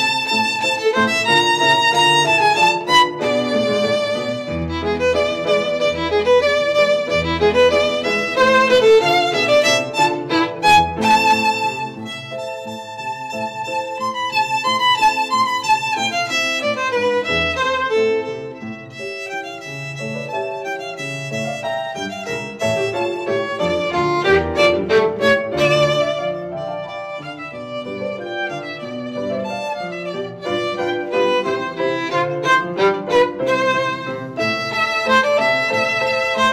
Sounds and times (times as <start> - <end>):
Violin, fiddle: 0.0 - 36.5.